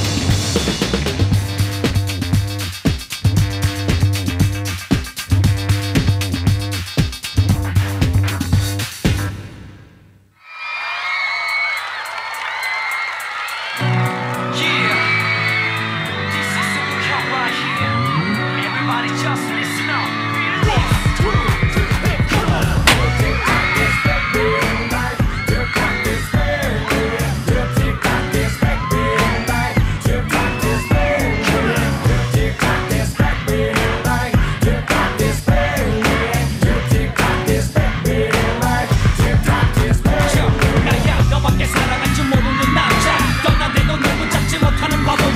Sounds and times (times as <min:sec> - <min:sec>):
Dance music: 0:12.8 - 0:45.3
Pop music: 0:12.9 - 0:45.3.